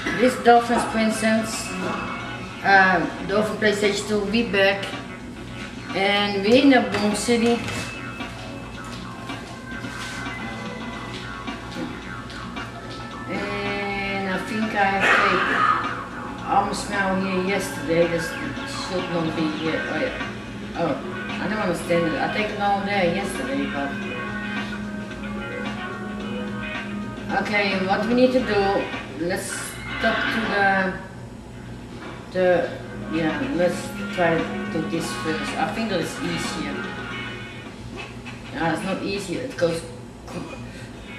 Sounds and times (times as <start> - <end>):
Speech: 0.0 - 1.9, 2.6 - 5.0, 5.9 - 7.9, 13.3 - 15.8, 16.4 - 20.2, 20.8 - 24.0, 27.3 - 31.1, 32.4 - 36.8, 38.6 - 40.6
Music: 0.0 - 41.1.